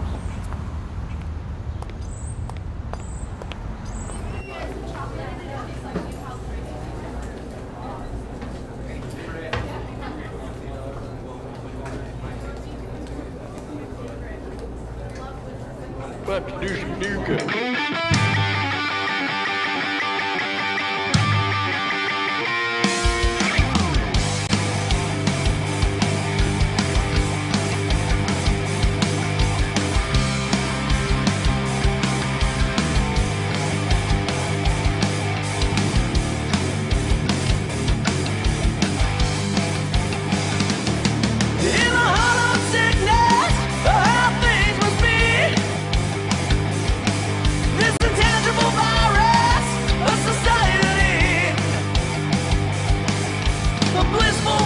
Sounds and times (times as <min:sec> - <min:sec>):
Rock and roll: 0:17.3 - 0:54.6
Heavy metal: 0:17.4 - 0:54.6.